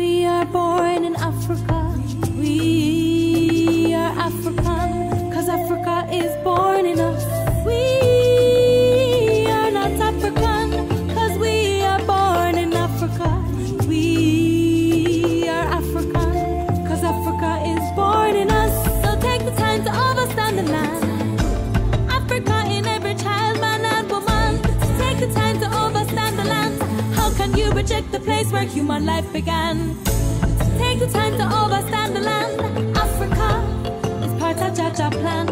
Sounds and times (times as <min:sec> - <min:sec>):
Inside, large room or hall: 0:00.0 - 0:35.5
Music: 0:00.0 - 0:35.5.